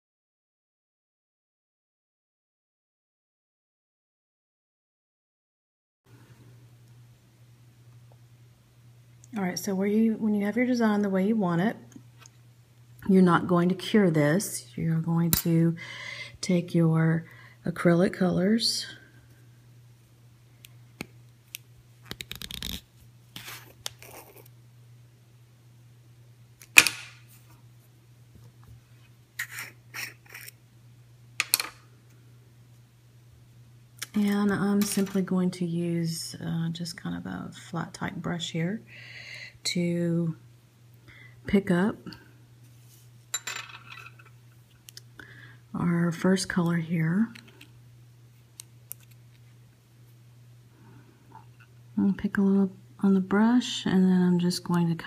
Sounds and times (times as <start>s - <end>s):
Speech: 9.3s - 11.9s, 13.0s - 15.8s, 16.4s - 19.0s, 34.0s - 38.9s, 39.6s - 40.4s, 41.5s - 42.2s, 45.8s - 47.4s, 52.0s - 55.0s.